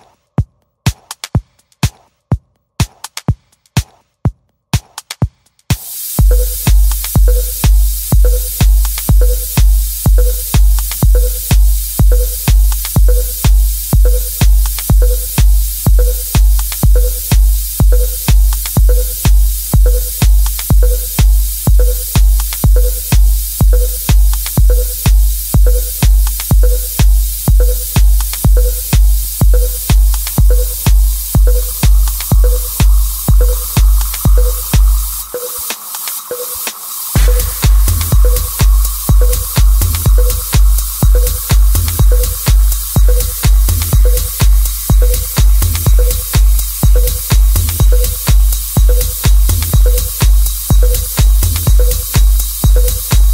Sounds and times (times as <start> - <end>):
Sampler: 5.8 - 53.3.